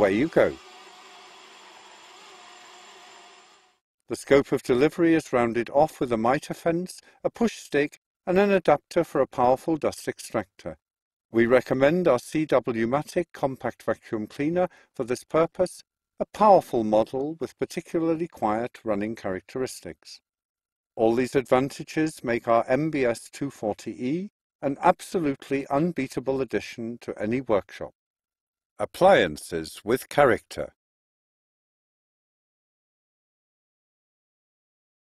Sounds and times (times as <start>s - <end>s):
Speech synthesizer: 28.8s - 30.8s.